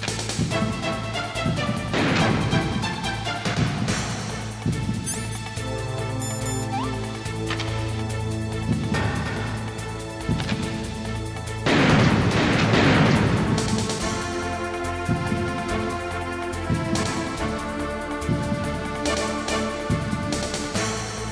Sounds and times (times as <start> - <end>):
Music: 0.0 - 21.3.